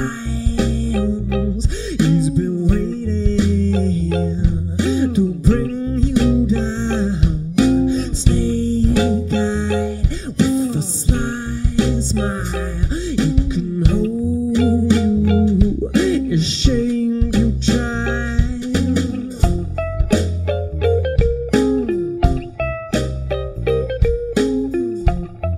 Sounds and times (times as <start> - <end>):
Bass guitar: 0.0 - 25.5.